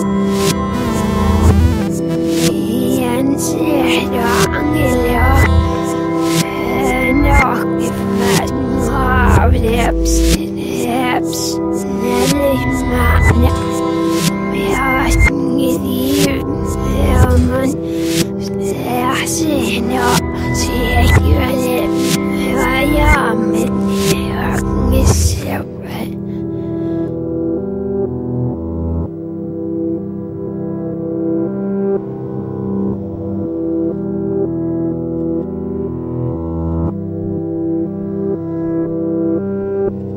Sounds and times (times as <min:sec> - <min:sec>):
Music: 0:00.0 - 0:40.1.